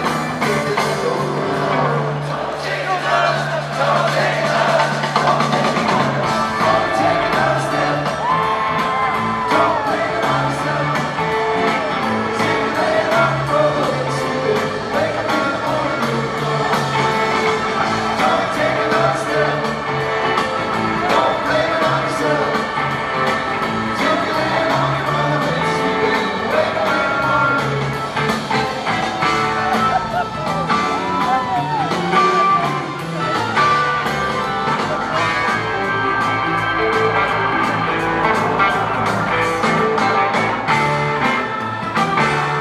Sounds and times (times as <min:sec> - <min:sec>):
Singing: 0:00.0 - 0:42.6.